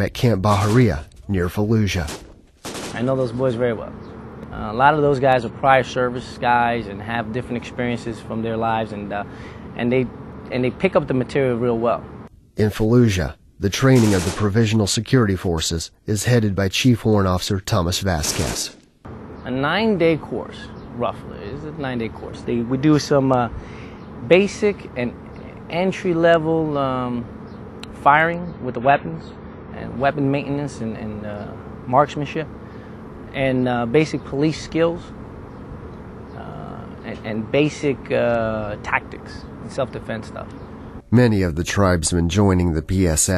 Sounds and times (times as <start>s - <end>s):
Speech: 0.0s - 2.2s, 2.9s - 12.0s, 12.6s - 18.8s, 19.5s - 23.6s, 24.2s - 27.3s, 27.9s - 29.2s, 29.8s - 32.5s, 33.4s - 35.1s, 36.4s - 40.5s, 41.1s - 43.3s.